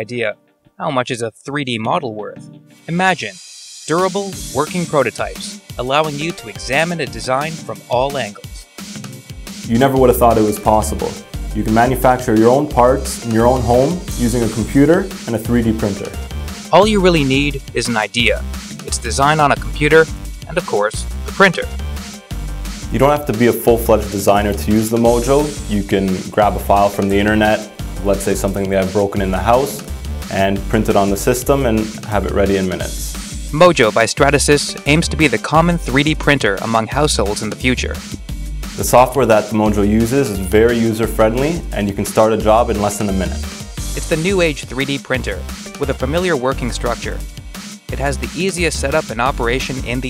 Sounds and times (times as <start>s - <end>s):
Speech: 0.0s - 8.6s, 9.7s - 21.8s, 22.9s - 38.0s, 38.8s - 47.2s, 47.9s - 50.0s
Music: 0.0s - 50.0s.